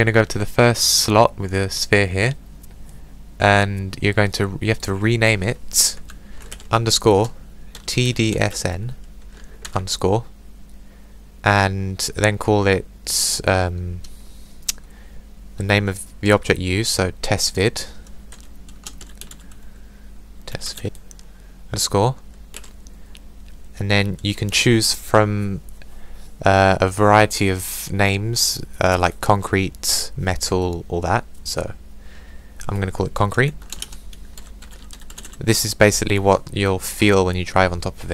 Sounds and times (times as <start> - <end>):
Computer keyboard: 6.0 - 7.9, 18.3 - 19.6, 22.5 - 22.8, 33.5 - 35.4.